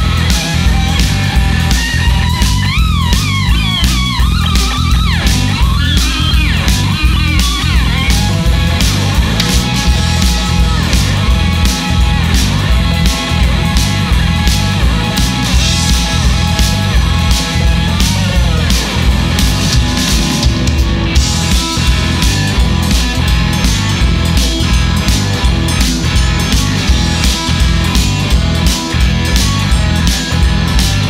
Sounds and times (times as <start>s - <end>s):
Guitar: 0.0s - 31.1s
Psychedelic rock: 0.0s - 31.1s.